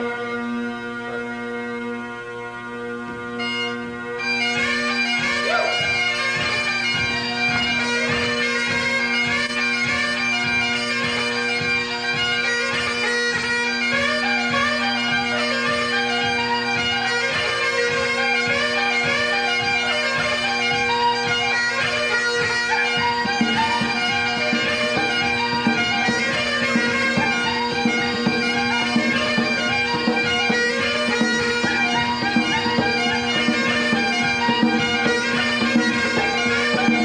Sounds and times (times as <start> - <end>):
Bagpipes: 0.0 - 37.0.